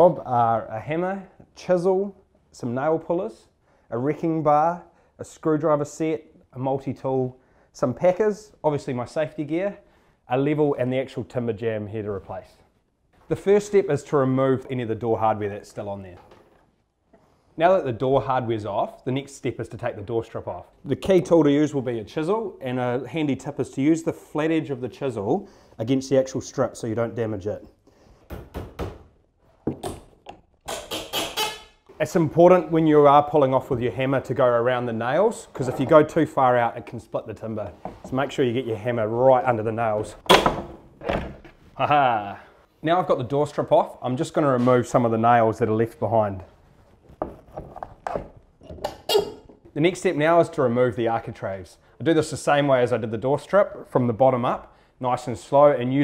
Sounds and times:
Speech: 0.0s - 12.7s, 13.3s - 16.3s, 17.6s - 27.8s, 31.9s - 40.2s, 41.8s - 46.6s, 49.8s - 56.0s.

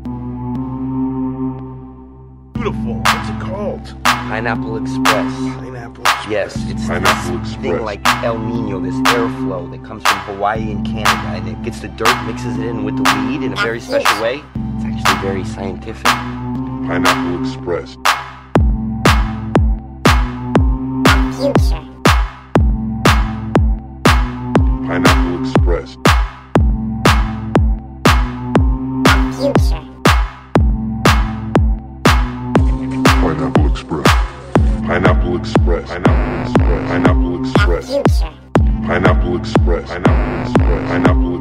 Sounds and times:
Music: 0.0s - 41.4s
Speech: 2.6s - 16.2s, 16.8s - 18.0s, 21.1s - 21.9s, 24.8s - 26.0s, 29.1s - 29.9s, 33.0s - 34.2s, 34.8s - 41.4s
Throbbing: 2.6s - 41.4s.

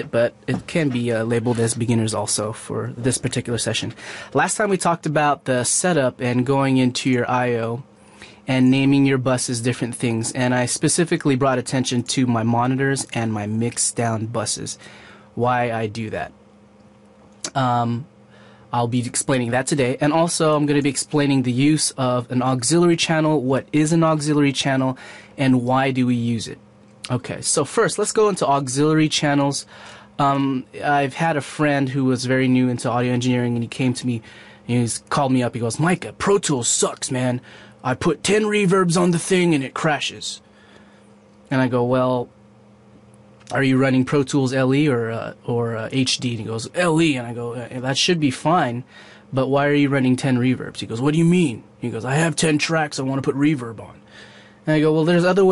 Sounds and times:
Speech: 0.0s - 14.8s, 15.4s - 16.4s, 17.5s - 18.1s, 18.7s - 40.4s, 41.5s - 42.3s, 43.5s - 54.0s, 54.6s - 55.5s.

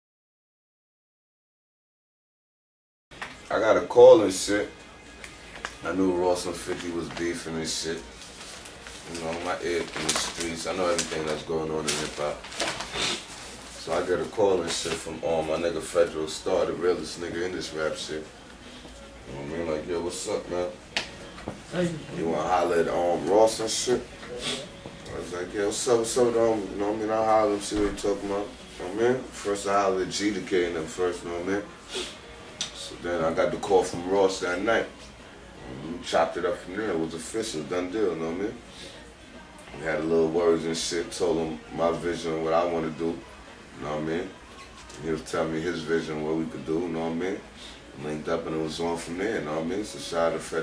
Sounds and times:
Speech: 3.5s - 4.8s, 5.8s - 8.1s, 9.0s - 12.4s, 13.8s - 18.4s, 19.3s - 20.8s, 21.7s - 31.7s, 32.6s - 35.0s, 35.6s - 50.6s.

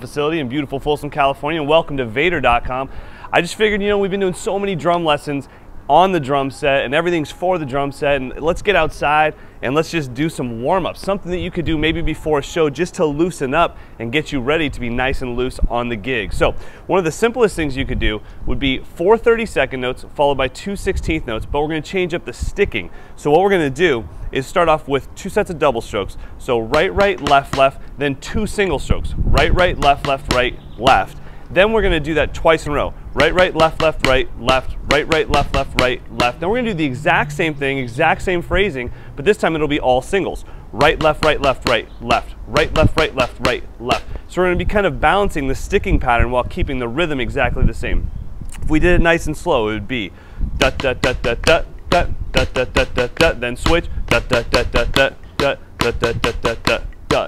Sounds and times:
Speech: 0.0s - 48.0s, 48.6s - 57.2s.

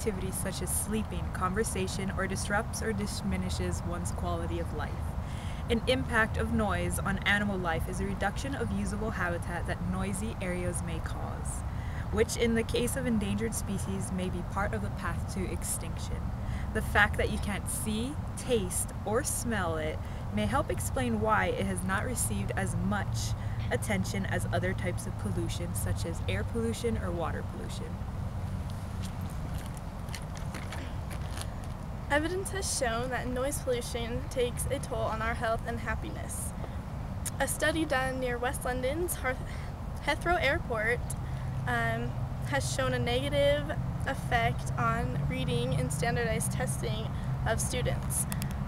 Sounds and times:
Speech: 0.0s - 28.0s, 32.1s - 36.5s, 37.3s - 48.4s.

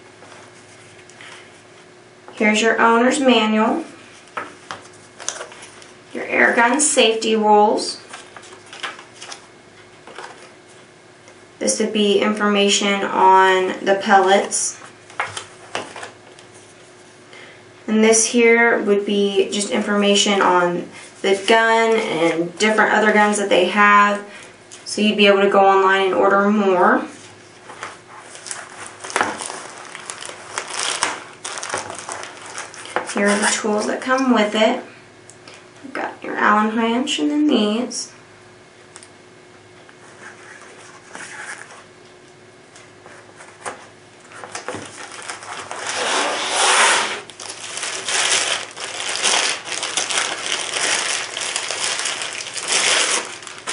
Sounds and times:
Speech: 2.4s - 4.0s, 6.1s - 8.0s, 11.6s - 14.8s, 17.9s - 27.2s, 33.1s - 34.9s, 35.8s - 38.2s.

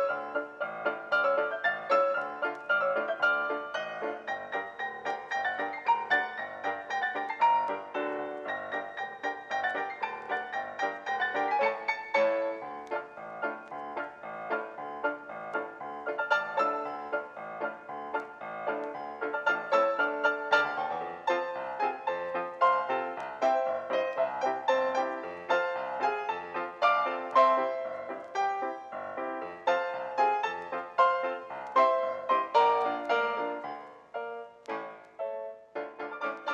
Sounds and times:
Music: 0.0s - 36.5s.

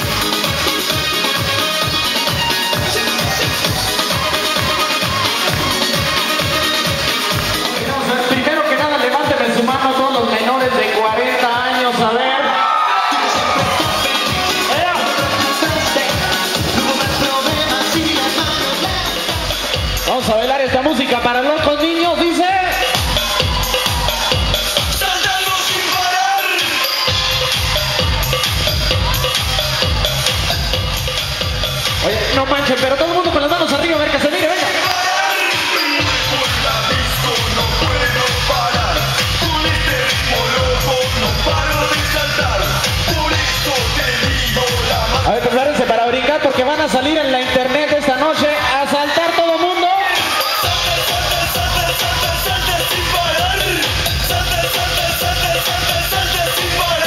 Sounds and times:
Electronica: 0.0s - 57.0s
Speech: 7.8s - 12.6s, 20.0s - 22.8s, 32.0s - 34.9s, 45.2s - 50.3s.

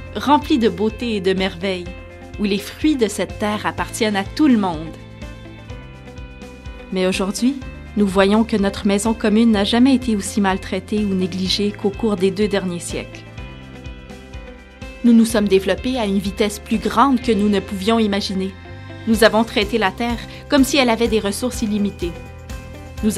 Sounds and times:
Music: 0.0s - 23.1s
Speech: 0.2s - 5.0s, 6.9s - 13.2s, 15.0s - 22.2s.

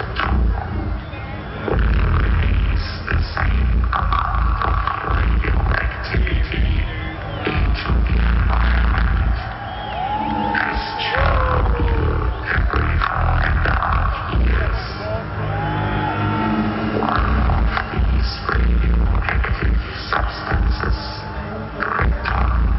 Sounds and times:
Speech: 1.1s - 9.4s, 10.5s - 15.3s, 17.1s - 22.7s.

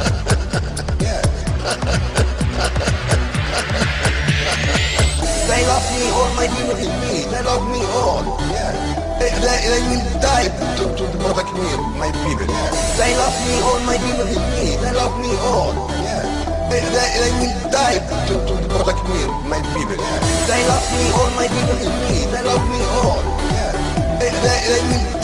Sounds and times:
Music: 0.0s - 25.2s.

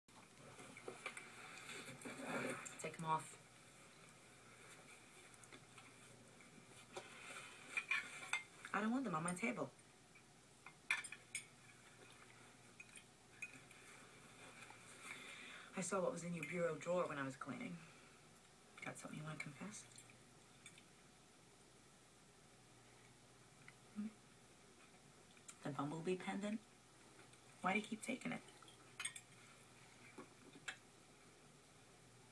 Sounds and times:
Inside, small room: 0.1s - 32.3s
Speech: 2.2s - 3.4s, 8.7s - 9.7s, 15.7s - 17.8s, 18.8s - 19.9s, 25.6s - 26.6s, 27.6s - 28.4s.

